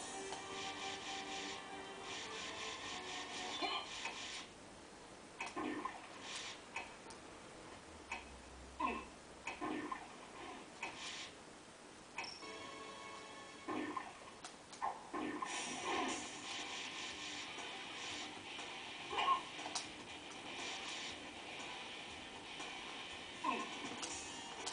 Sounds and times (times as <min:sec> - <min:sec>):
Music: 0:00.0 - 0:04.0, 0:12.4 - 0:14.2, 0:15.5 - 0:24.7.